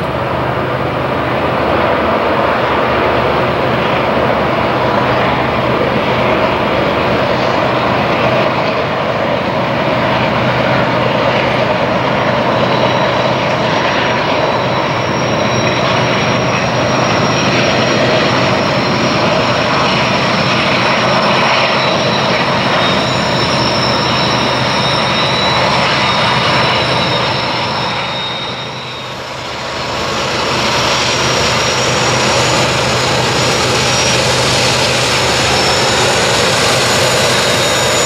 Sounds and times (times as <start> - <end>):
Railroad car, train wagon: 0.0 - 38.0
Train: 0.0 - 38.0.